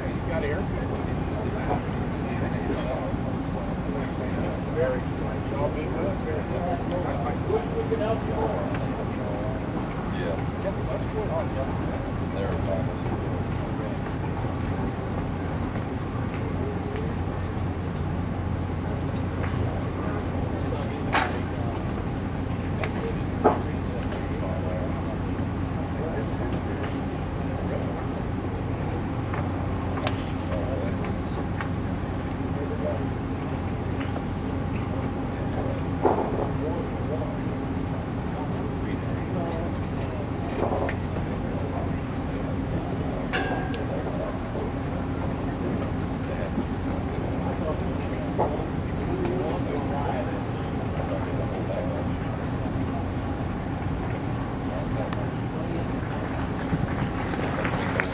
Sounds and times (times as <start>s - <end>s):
Speech: 0.0s - 58.1s.